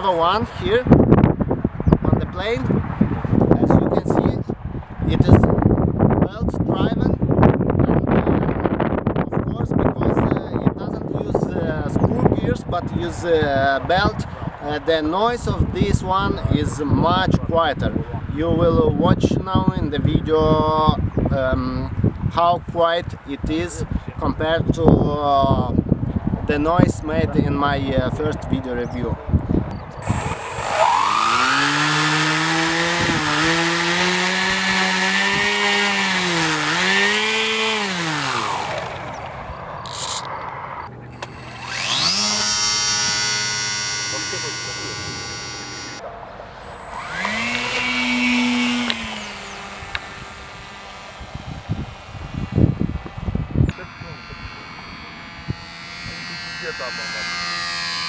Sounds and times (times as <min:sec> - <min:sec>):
Speech: 0:00.0 - 0:00.9, 0:02.1 - 0:02.7, 0:03.6 - 0:04.5, 0:05.1 - 0:05.5, 0:06.2 - 0:07.2, 0:09.3 - 0:25.8, 0:26.5 - 0:29.2, 0:44.1 - 0:45.0, 0:53.7 - 0:54.7, 0:56.0 - 0:57.4.